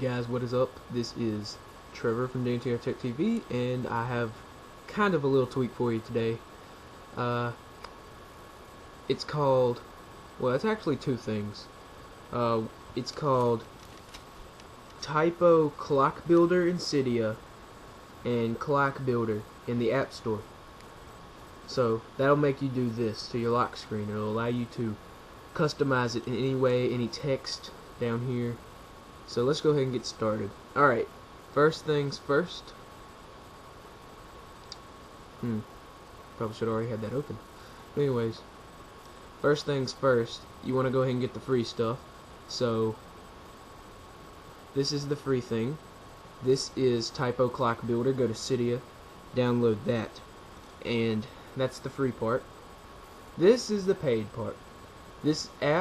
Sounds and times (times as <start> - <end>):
Speech: 0.0 - 6.4, 7.2 - 7.6, 9.1 - 11.7, 12.3 - 13.7, 15.0 - 17.4, 18.2 - 20.5, 21.7 - 25.0, 25.6 - 28.6, 29.3 - 32.8, 35.4 - 35.7, 36.4 - 37.4, 38.0 - 38.5, 39.4 - 43.0, 44.7 - 45.8, 46.4 - 50.2, 50.8 - 52.5, 53.4 - 54.6, 55.2 - 55.8.